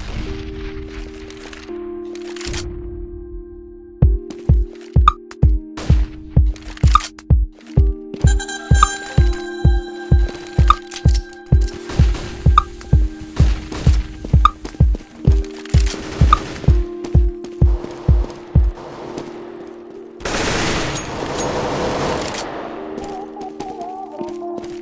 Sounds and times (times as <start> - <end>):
Music: 0.0 - 24.8.